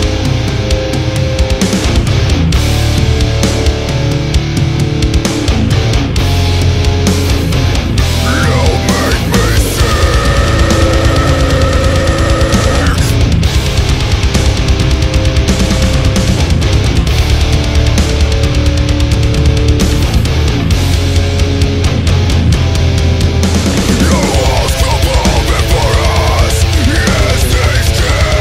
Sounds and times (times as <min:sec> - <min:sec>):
Background music: 0:00.0 - 0:28.4.